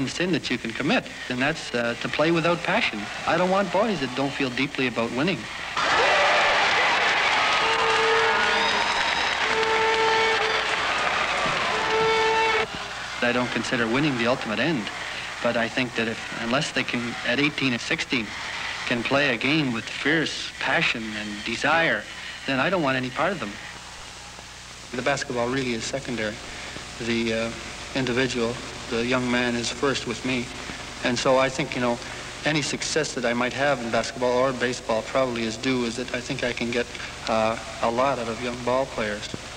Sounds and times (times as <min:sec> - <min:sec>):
Speech: 0:00.0 - 0:05.5, 0:13.2 - 0:23.6, 0:24.9 - 0:26.4, 0:27.0 - 0:39.4
Inside, large room or hall: 0:00.0 - 0:39.5
Inside, public space: 0:00.0 - 0:39.5.